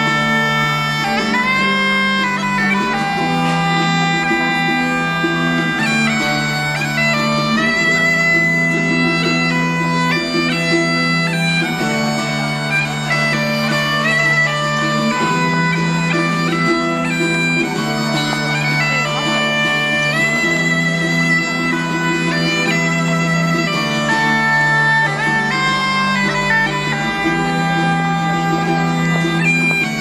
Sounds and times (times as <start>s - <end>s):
Bagpipes: 0.0s - 30.0s.